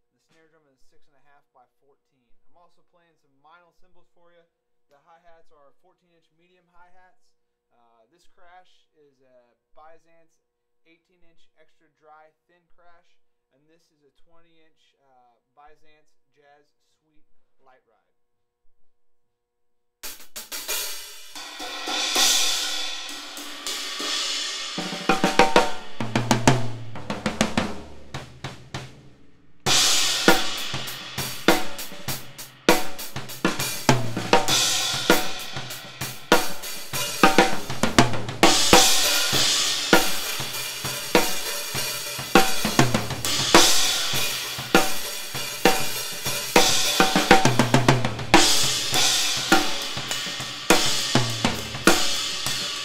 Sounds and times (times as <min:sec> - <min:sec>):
Hi-hat: 0:29.7 - 0:52.8.